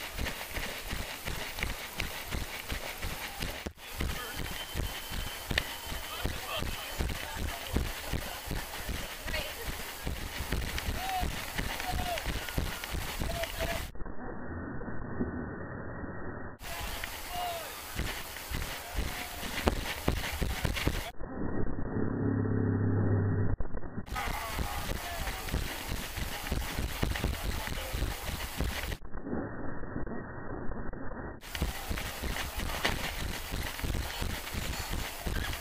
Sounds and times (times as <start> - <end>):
Run: 0.0 - 13.9, 16.6 - 21.1, 24.1 - 29.0, 31.4 - 35.6.